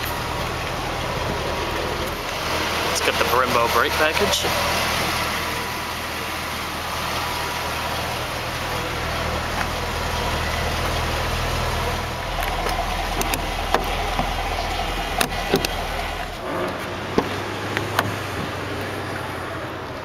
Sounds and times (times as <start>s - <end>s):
Car: 0.0s - 20.0s
Outside, urban or manmade: 0.0s - 20.0s
Speech: 3.0s - 4.6s.